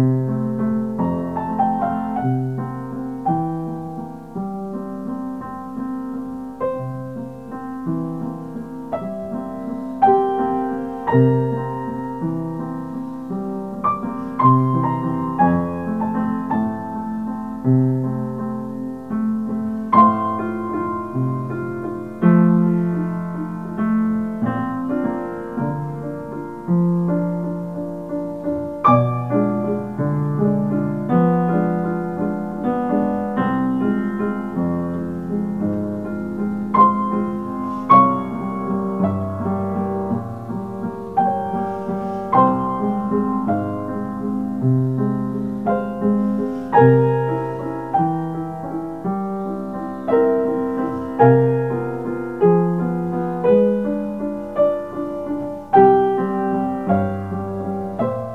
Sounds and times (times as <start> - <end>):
Music: 0.0 - 58.3.